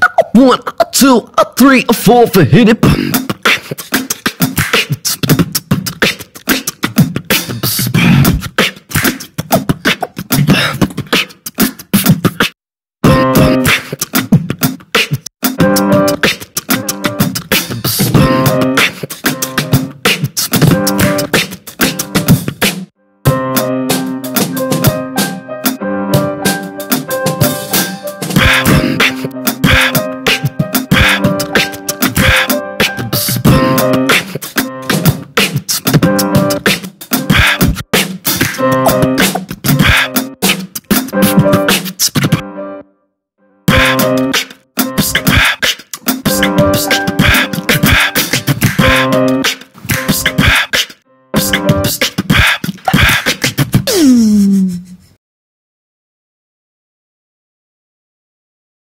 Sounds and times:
Beatboxing: 0:00.0 - 0:22.9, 0:26.5 - 0:42.4, 0:43.7 - 0:55.2.

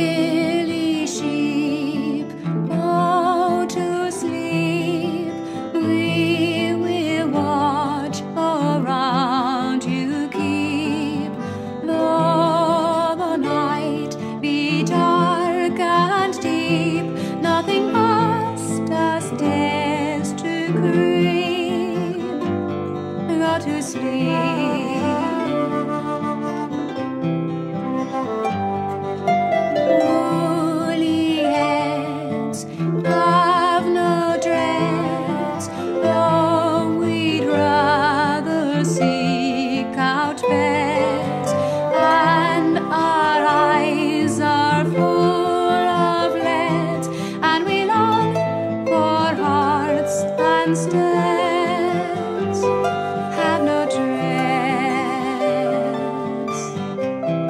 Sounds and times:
Music: 0:00.0 - 0:57.4.

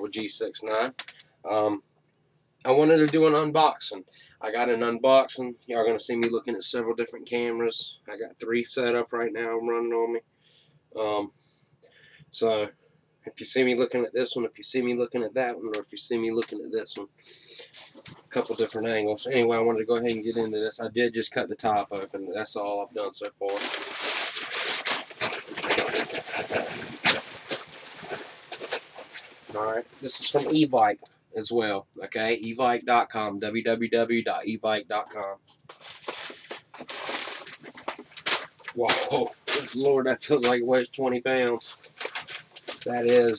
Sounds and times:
Speech: 0:00.0 - 0:01.8, 0:02.7 - 0:10.2, 0:11.0 - 0:11.4, 0:12.3 - 0:12.7, 0:13.3 - 0:23.8, 0:29.5 - 0:35.4, 0:38.7 - 0:41.9, 0:42.8 - 0:43.3.

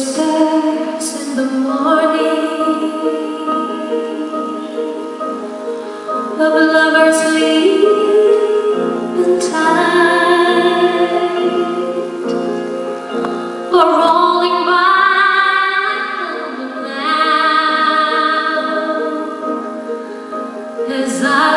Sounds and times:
Tender music: 0:00.0 - 0:21.5.

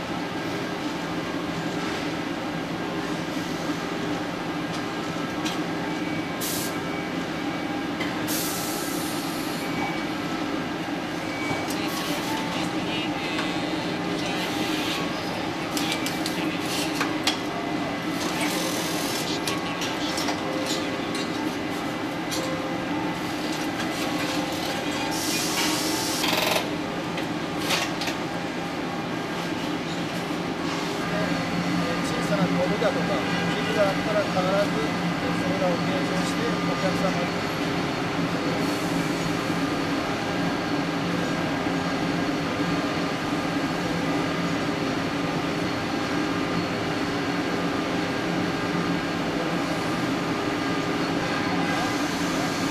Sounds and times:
Speech: 0:11.7 - 0:15.0, 0:31.1 - 0:37.4.

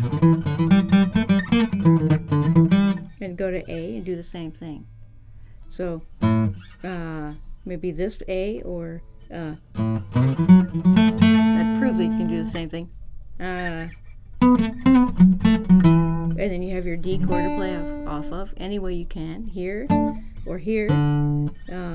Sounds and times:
Acoustic guitar: 0:00.0 - 0:21.9
Strum: 0:00.0 - 0:21.9
Speech: 0:03.2 - 0:04.8, 0:05.7 - 0:06.1, 0:06.8 - 0:09.6, 0:11.6 - 0:14.0, 0:16.4 - 0:21.1, 0:21.7 - 0:21.9.

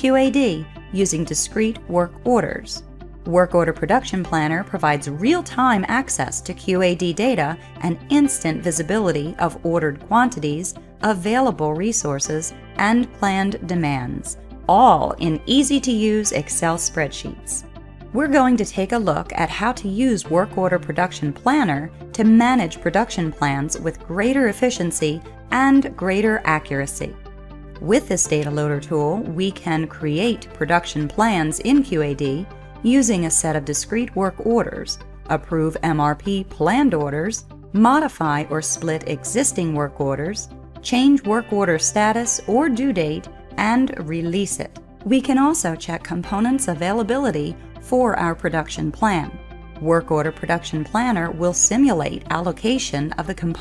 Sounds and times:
Narration, monologue: 0:00.0 - 0:53.6.

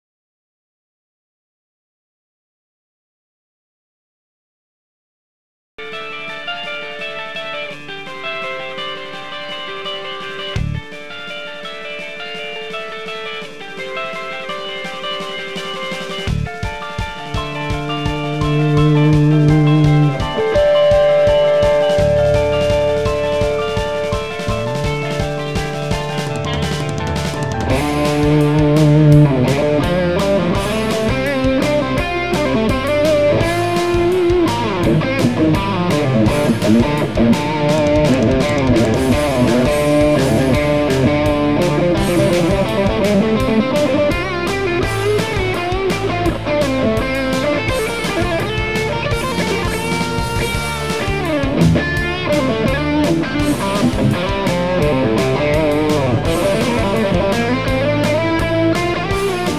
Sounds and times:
Electric guitar: 0:05.8 - 0:59.5.

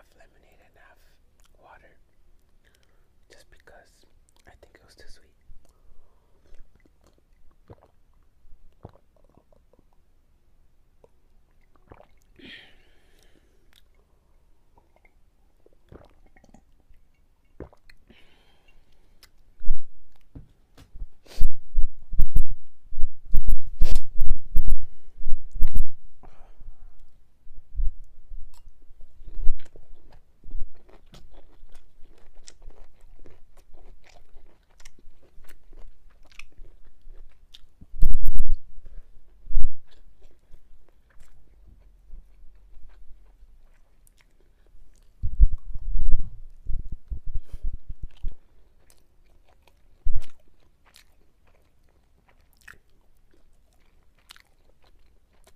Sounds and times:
Chewing, mastication: 0:01.4 - 0:10.1, 0:11.0 - 0:12.4, 0:13.0 - 0:20.3, 0:28.5 - 0:37.8, 0:38.5 - 0:46.2, 0:47.1 - 0:55.5.

